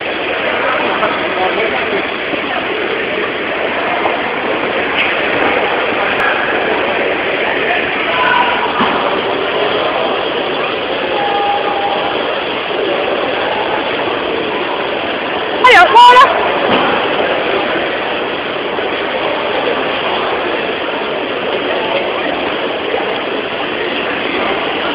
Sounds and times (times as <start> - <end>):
Speech: 15.6 - 16.5.